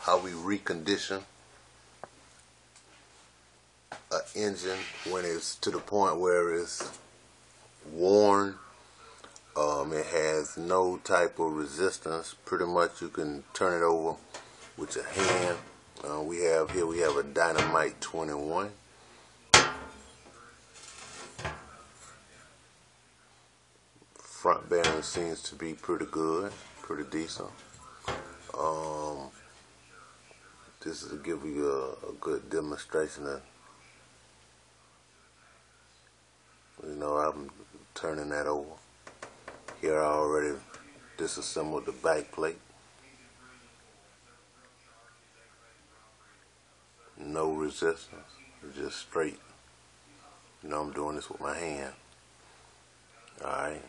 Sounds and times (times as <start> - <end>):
Speech: 0.0 - 1.3, 4.1 - 7.0, 7.8 - 18.8, 20.2 - 23.5, 24.1 - 34.1, 34.8 - 38.8, 39.8 - 52.1, 53.0 - 53.8.